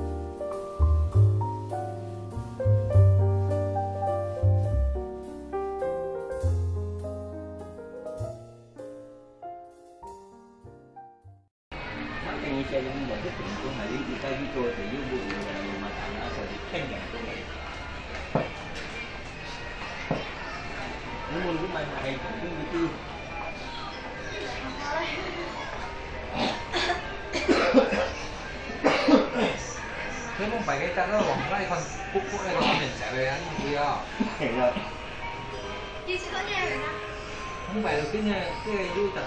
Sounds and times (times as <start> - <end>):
Music: 0.0 - 12.2, 17.6 - 39.2.